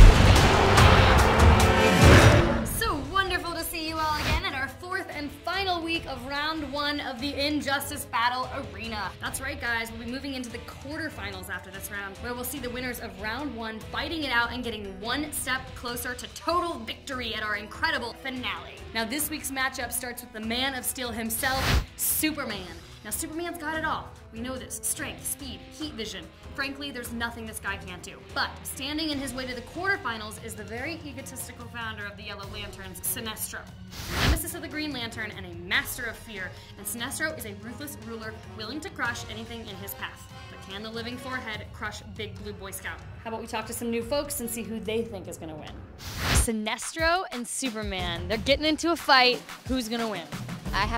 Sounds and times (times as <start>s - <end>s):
Music: 0.0s - 50.9s
Speech: 2.8s - 33.7s, 34.3s - 45.8s, 46.4s - 50.9s.